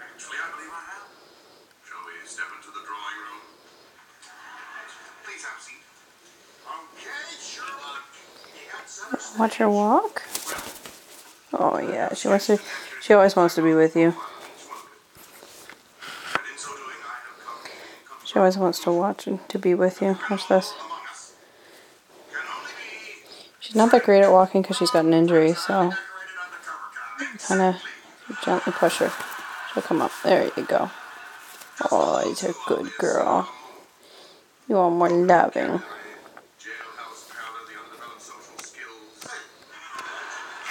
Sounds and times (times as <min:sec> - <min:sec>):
Speech: 0:06.8 - 0:10.4, 0:11.5 - 0:14.9, 0:16.4 - 0:21.4, 0:23.6 - 0:29.2, 0:29.8 - 0:31.0, 0:31.8 - 0:33.8, 0:34.7 - 0:36.0.